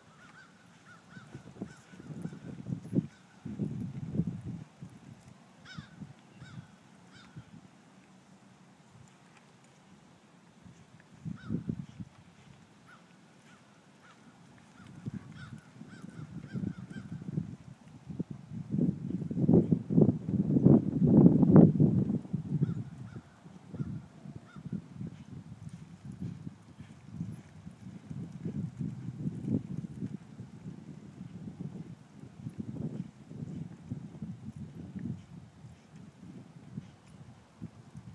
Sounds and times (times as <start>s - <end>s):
Clip-clop: 0.0s - 20.9s, 21.5s - 38.1s.